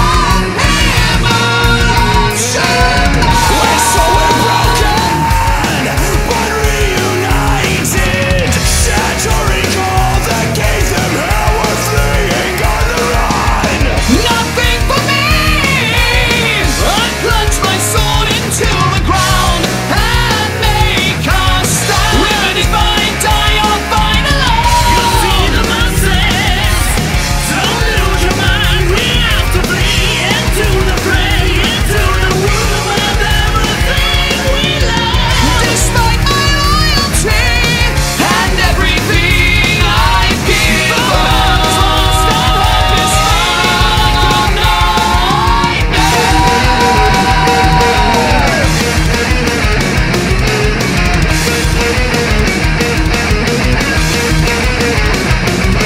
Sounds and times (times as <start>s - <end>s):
Progressive rock: 0.0s - 55.8s.